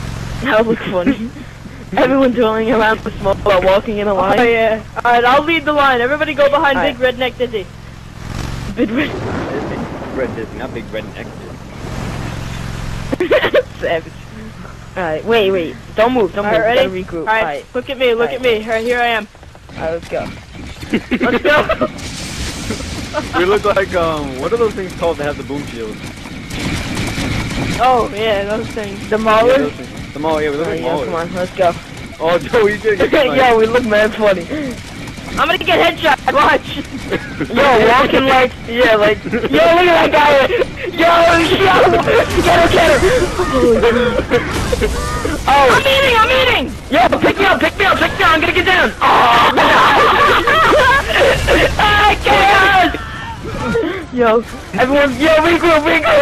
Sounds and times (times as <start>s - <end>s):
Speech: 0.4s - 7.7s, 8.7s - 11.6s, 13.1s - 22.0s, 22.6s - 26.0s, 27.8s - 34.8s, 35.4s - 56.2s.